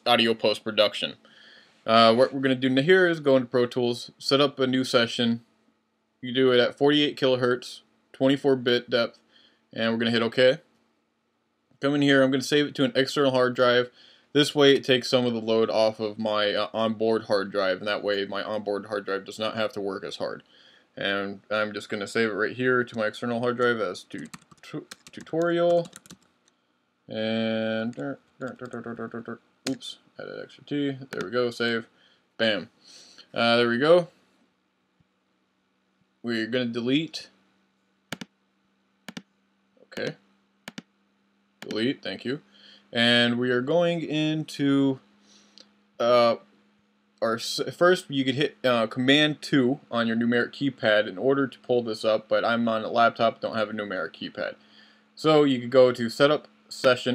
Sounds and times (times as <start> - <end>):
Speech: 0.0 - 1.2, 1.9 - 5.4, 6.2 - 9.2, 9.8 - 10.7, 11.8 - 20.4, 21.0 - 26.0, 27.1 - 32.7, 33.3 - 34.2, 36.2 - 37.4, 39.9 - 40.2, 41.6 - 45.0, 46.0 - 46.5, 47.2 - 54.6, 55.2 - 57.1.